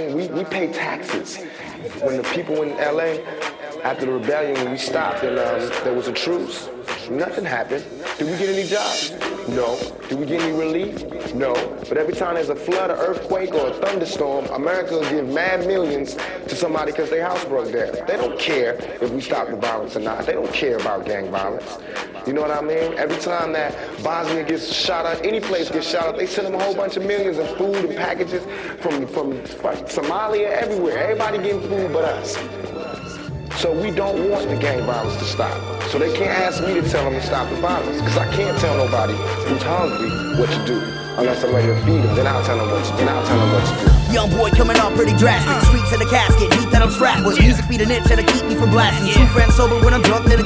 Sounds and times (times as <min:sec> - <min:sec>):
Music: 0:00.0 - 0:50.4.